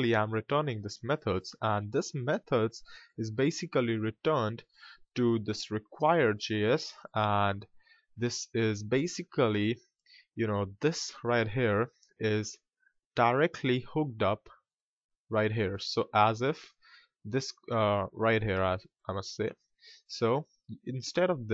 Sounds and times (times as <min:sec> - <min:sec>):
Narration, monologue: 0:00.0 - 0:21.5.